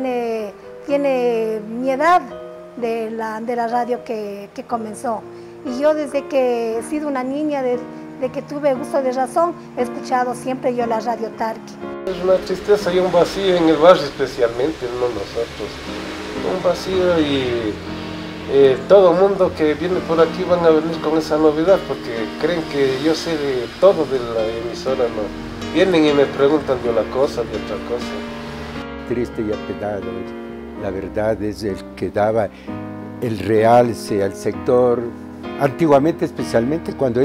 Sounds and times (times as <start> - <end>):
Speech: 0.0 - 15.7, 18.5 - 28.1, 29.1 - 32.5, 33.2 - 37.2
Music: 0.0 - 37.2.